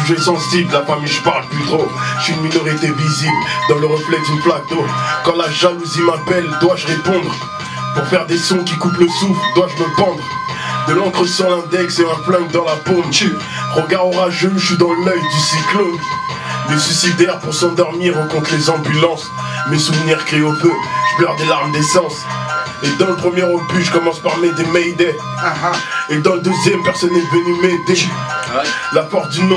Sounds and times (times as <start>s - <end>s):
Music: 0.0s - 29.5s.